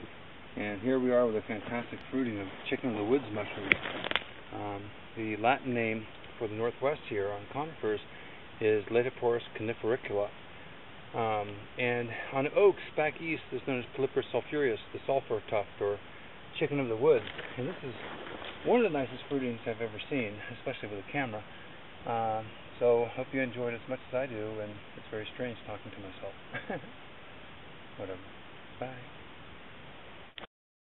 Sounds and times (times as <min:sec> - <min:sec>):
Speech: 0:00.6 - 0:03.9, 0:04.5 - 0:10.4, 0:11.1 - 0:26.8, 0:28.0 - 0:29.1.